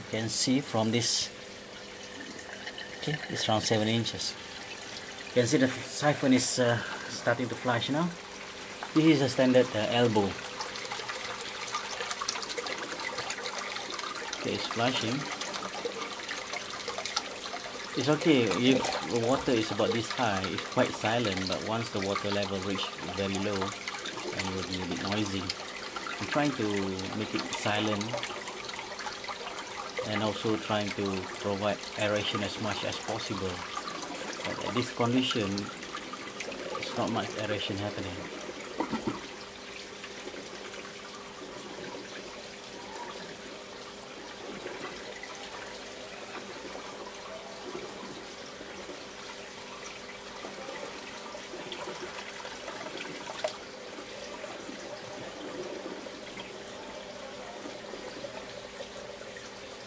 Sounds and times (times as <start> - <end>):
Speech: 0.0 - 1.3, 3.0 - 4.4, 5.4 - 8.2, 9.0 - 10.4, 14.4 - 15.3, 18.0 - 23.8, 24.4 - 25.6, 26.2 - 28.3, 30.0 - 33.7, 34.4 - 35.7, 36.8 - 38.3.